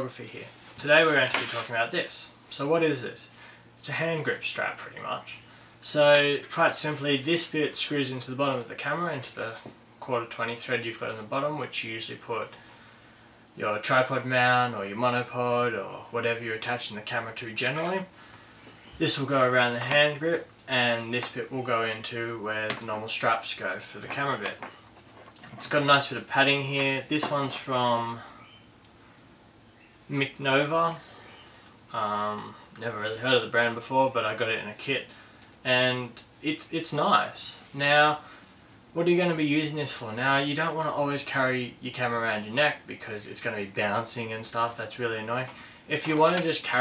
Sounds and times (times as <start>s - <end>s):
Speech: 0.0s - 12.6s, 13.6s - 18.2s, 19.0s - 24.8s, 25.4s - 28.4s, 30.1s - 31.1s, 31.9s - 38.2s, 39.0s - 46.8s.